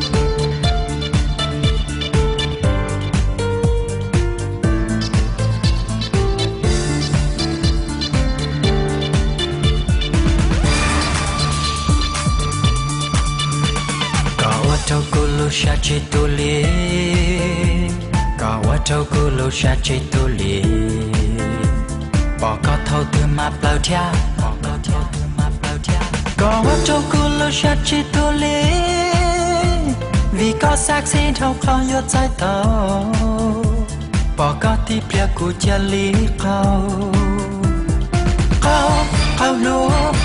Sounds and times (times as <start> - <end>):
Music: 0.0 - 40.2.